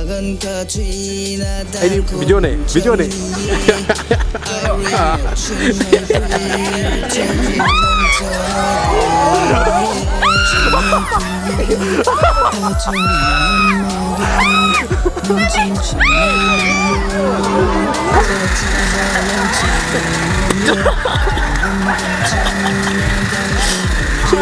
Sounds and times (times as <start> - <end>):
Music: 0.0 - 24.4.